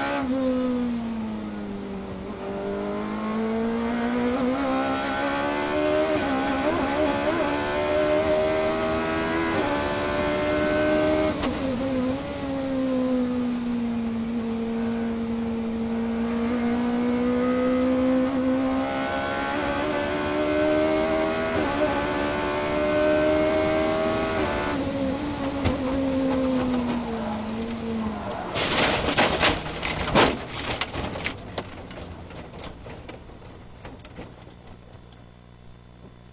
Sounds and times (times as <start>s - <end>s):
Car: 0.0s - 36.3s.